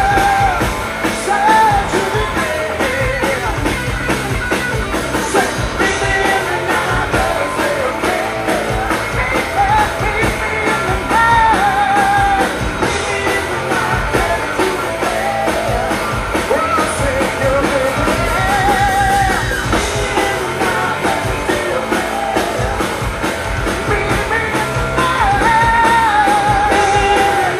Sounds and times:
Singing: 0:00.0 - 0:03.9, 0:05.0 - 0:27.5
Drum: 0:00.0 - 0:27.5
Drum kit: 0:00.0 - 0:27.5
Inside, large room or hall: 0:00.0 - 0:27.5
Rock and roll: 0:00.0 - 0:27.5.

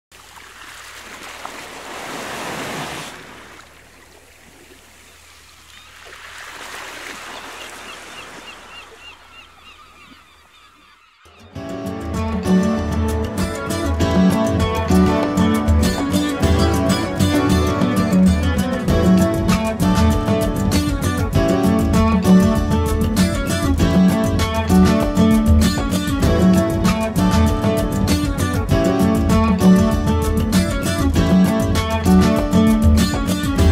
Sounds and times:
Ocean: 0:00.1 - 0:11.7.

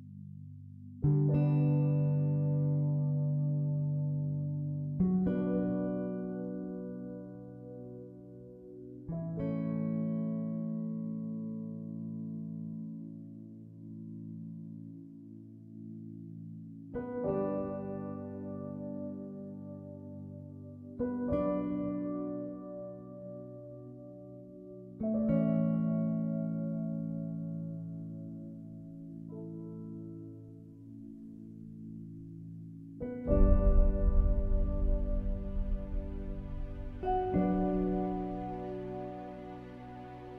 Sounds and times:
Piano: 0:00.0 - 0:40.3.

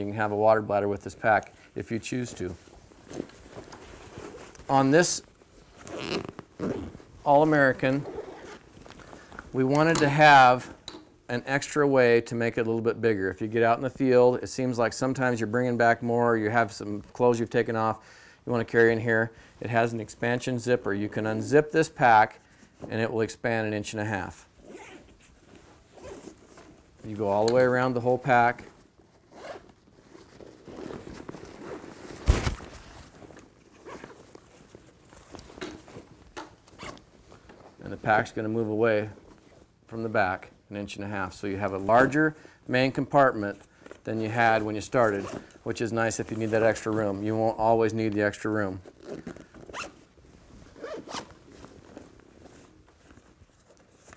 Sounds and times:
Speech: 0:00.0 - 0:02.6, 0:04.7 - 0:05.2, 0:07.2 - 0:08.2, 0:09.6 - 0:24.5, 0:27.0 - 0:28.7, 0:37.8 - 0:39.2, 0:39.9 - 0:48.9
Inside, small room: 0:00.0 - 0:54.1.

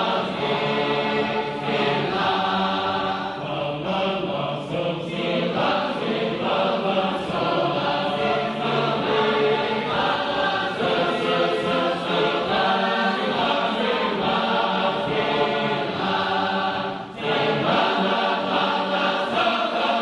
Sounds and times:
Choir: 0:00.0 - 0:20.0
Male singing: 0:03.4 - 0:08.8.

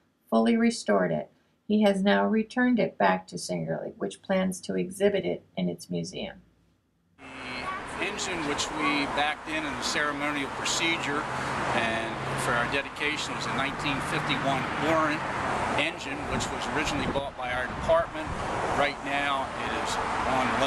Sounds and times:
Speech: 0:00.4 - 0:06.4, 0:07.3 - 0:15.2, 0:15.8 - 0:20.6
Vehicle: 0:07.2 - 0:20.6.

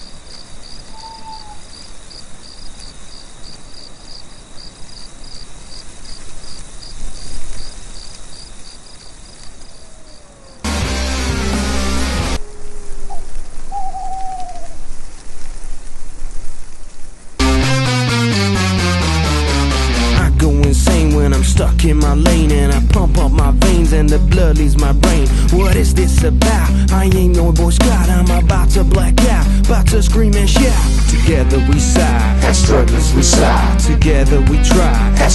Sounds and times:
Rock and roll: 0:10.7 - 0:12.4, 0:17.4 - 0:35.3.

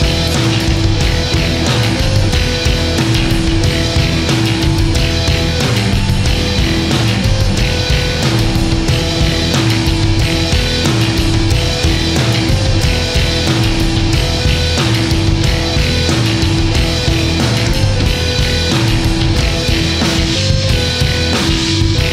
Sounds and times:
Progressive rock: 0:00.0 - 0:22.1
Punk rock: 0:00.0 - 0:22.1.

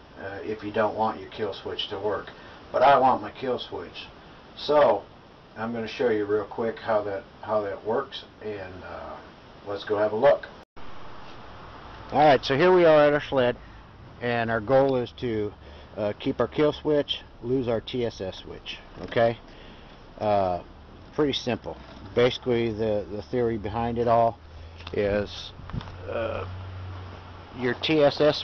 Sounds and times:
Speech: 0:00.2 - 0:10.6, 0:12.1 - 0:13.6, 0:14.2 - 0:19.4, 0:20.2 - 0:26.5, 0:27.6 - 0:28.4.

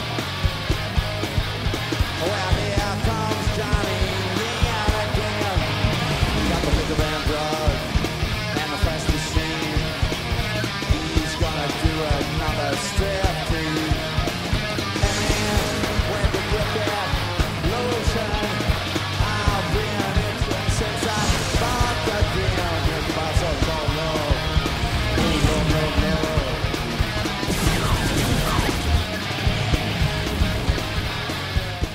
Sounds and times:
Electric guitar: 0:00.0 - 0:31.9.

